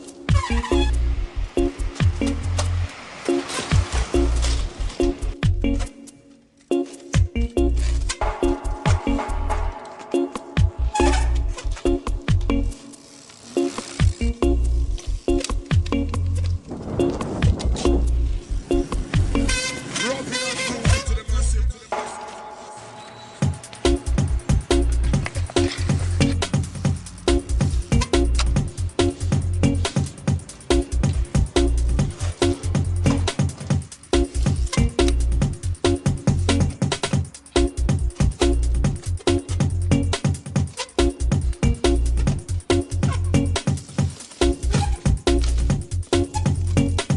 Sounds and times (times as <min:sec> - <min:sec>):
Bicycle: 0:00.0 - 0:08.4, 0:10.8 - 0:21.0, 0:22.8 - 0:47.1
Music: 0:00.0 - 0:47.1.